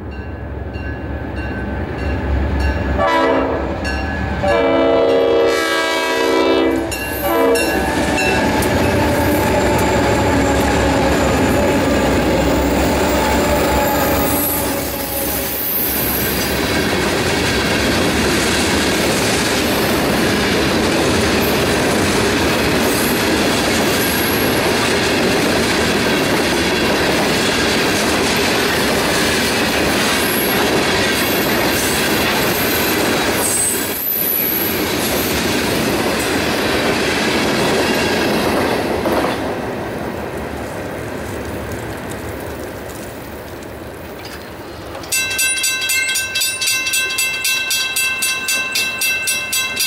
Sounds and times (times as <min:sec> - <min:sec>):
Railroad car, train wagon: 0:00.0 - 0:49.8
Train horn: 0:03.0 - 0:15.7.